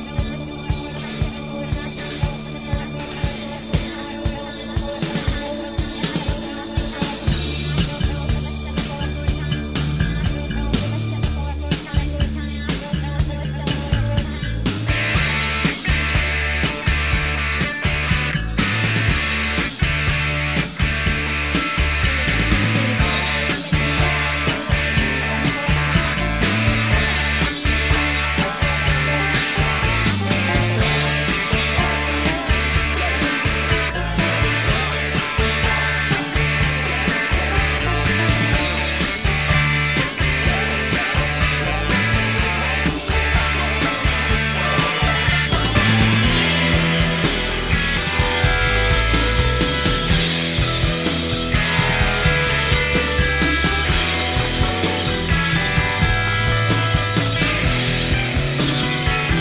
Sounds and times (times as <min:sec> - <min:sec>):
Music: 0:00.0 - 0:59.4.